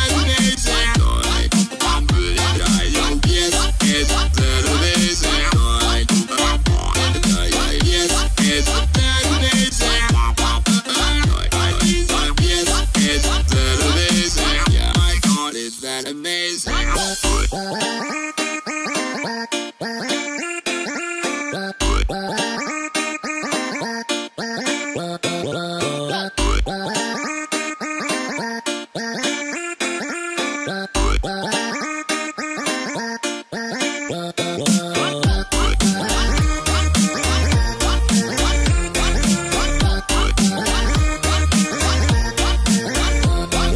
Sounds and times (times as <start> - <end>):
Music: 0.0 - 43.7.